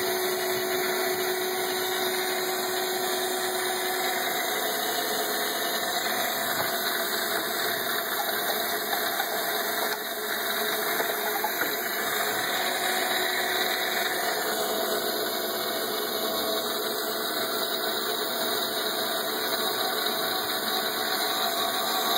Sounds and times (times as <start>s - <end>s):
Pump (liquid): 0.0s - 22.1s.